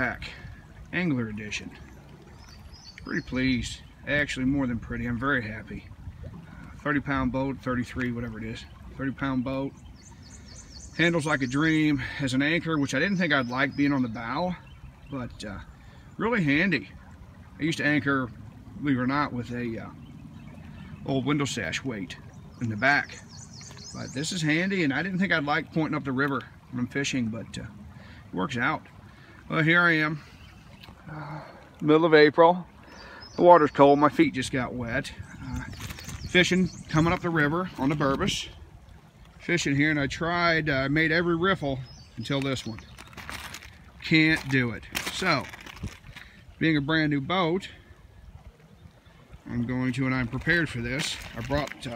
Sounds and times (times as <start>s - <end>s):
Speech: 0.0s - 1.8s, 3.0s - 5.9s, 11.0s - 15.6s, 16.2s - 16.9s, 17.6s - 20.0s, 21.0s - 23.2s, 24.0s - 27.7s, 28.4s - 28.9s, 33.4s - 35.7s, 36.3s - 38.6s, 39.4s - 42.8s, 44.0s - 45.6s, 46.6s - 47.8s, 49.5s - 51.9s.